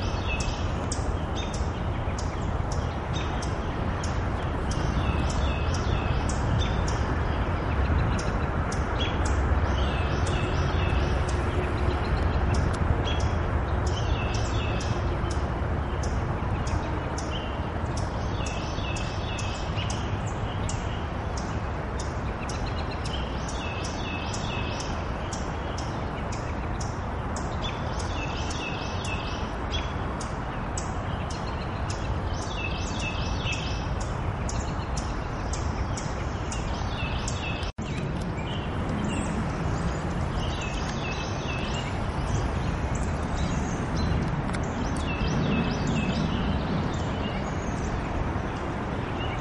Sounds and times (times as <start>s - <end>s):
Chirp, tweet: 0.0s - 49.4s.